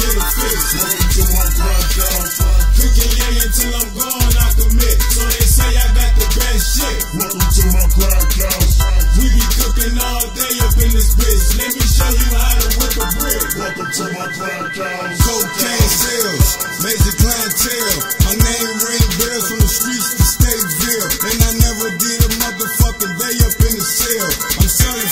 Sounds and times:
House music: 0.0s - 25.1s.

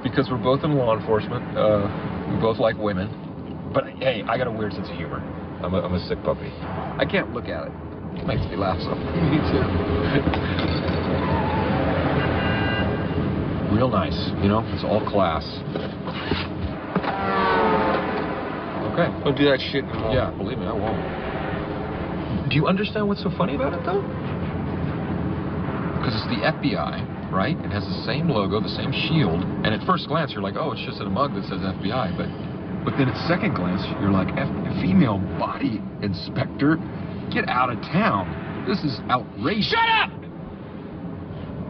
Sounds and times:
Outside, urban or manmade: 0.0s - 41.7s.

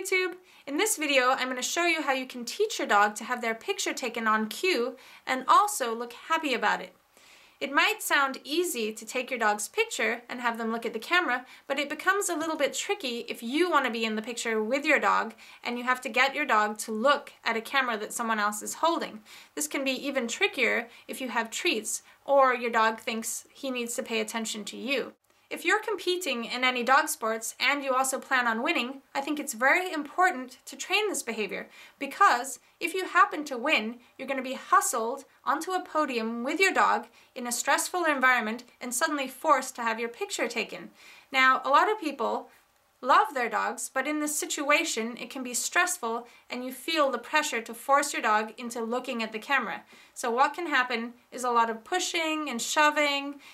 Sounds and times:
Speech: 0.0s - 7.0s, 7.6s - 53.4s.

